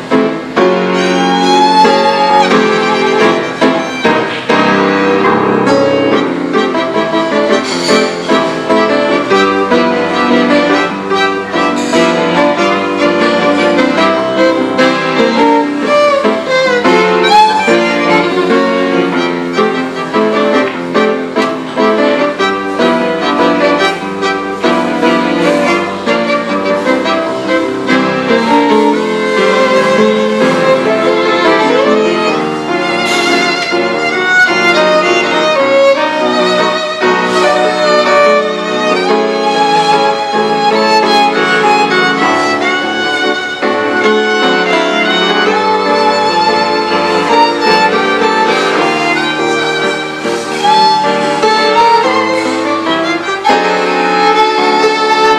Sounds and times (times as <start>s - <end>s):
Violin, fiddle: 0.0s - 55.3s.